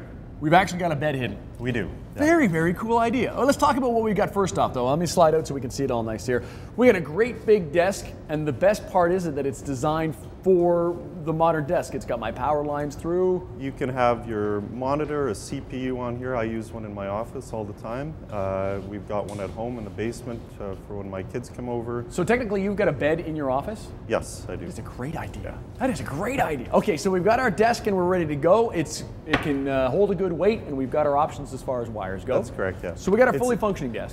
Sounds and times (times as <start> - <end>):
Speech: 0.4 - 34.1.